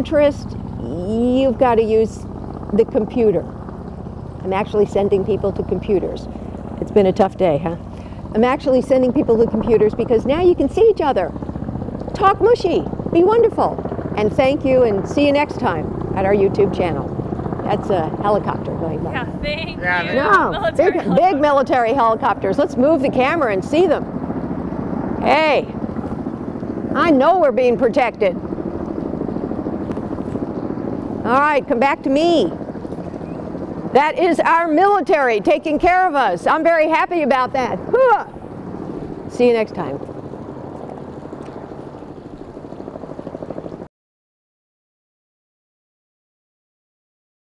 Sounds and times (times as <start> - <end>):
Speech: 0.0 - 3.5, 4.4 - 6.2, 6.8 - 7.8, 8.4 - 11.3, 12.2 - 17.1, 17.7 - 24.0, 25.2 - 25.8, 27.0 - 28.4, 31.3 - 32.5, 34.0 - 38.3, 39.4 - 40.0
Helicopter: 0.0 - 43.9.